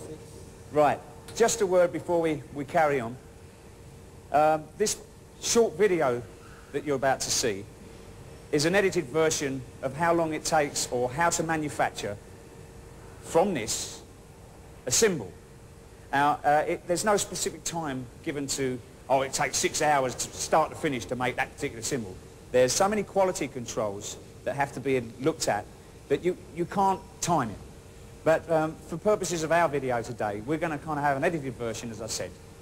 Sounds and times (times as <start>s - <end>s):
Speech: 0.0s - 3.2s, 4.3s - 7.7s, 8.5s - 12.2s, 13.3s - 14.1s, 14.9s - 15.4s, 16.1s - 32.4s.